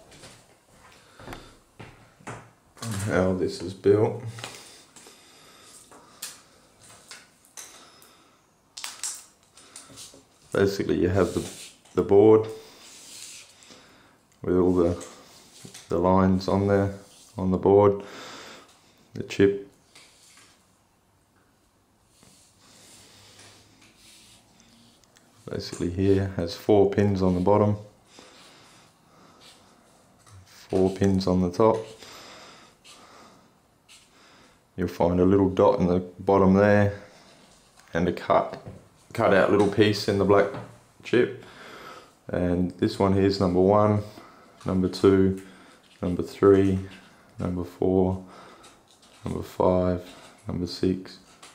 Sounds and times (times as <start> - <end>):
Inside, small room: 0.0 - 51.5
Speech: 2.8 - 4.4, 10.5 - 12.6, 14.4 - 15.1, 15.9 - 18.0, 19.2 - 19.7, 25.4 - 27.9, 30.5 - 32.0, 34.8 - 37.1, 37.9 - 41.4, 42.3 - 48.3, 49.2 - 51.2.